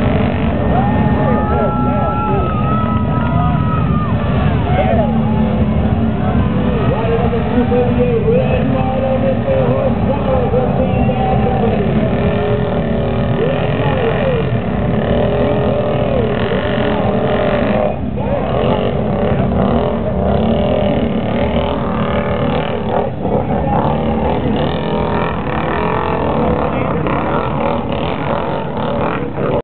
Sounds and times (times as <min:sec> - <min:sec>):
Speech: 0:06.1 - 0:20.6, 0:22.5 - 0:29.6.